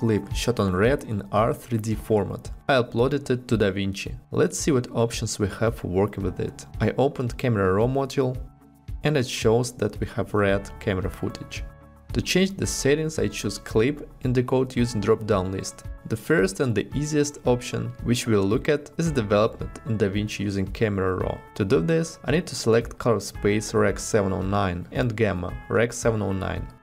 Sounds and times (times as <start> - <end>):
Music: 0.0 - 26.8
Speech: 0.0 - 26.8.